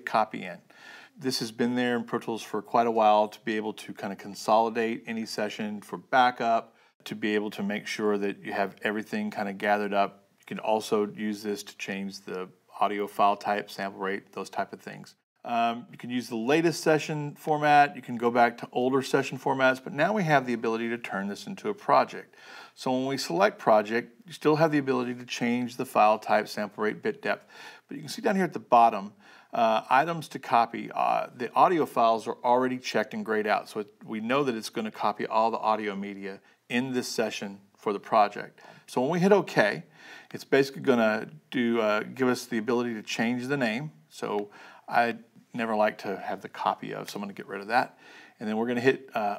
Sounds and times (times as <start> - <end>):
Speech: 0.0 - 49.3.